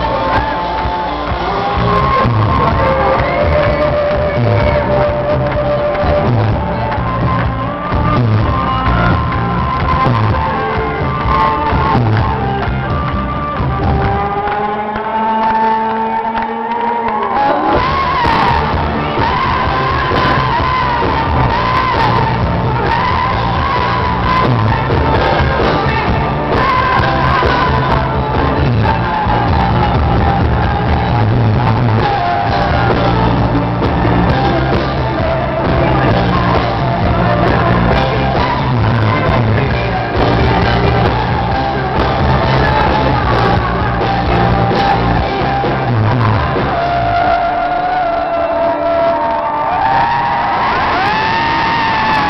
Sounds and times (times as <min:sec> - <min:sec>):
Crowd: 0:00.0 - 0:52.3
Music: 0:00.0 - 0:52.3
Singing: 0:00.0 - 0:52.3.